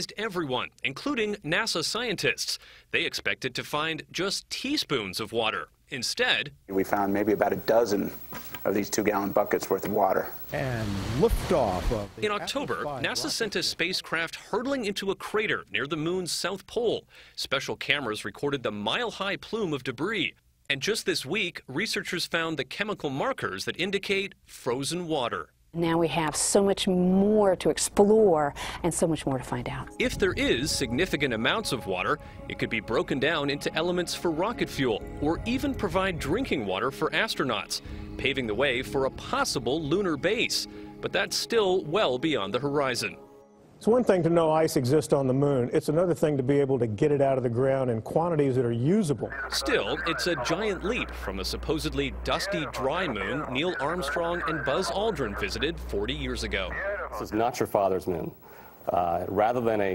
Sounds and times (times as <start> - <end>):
Speech: 0.0 - 43.2, 43.8 - 58.3, 58.9 - 59.9
Music: 29.4 - 44.0, 50.0 - 56.8.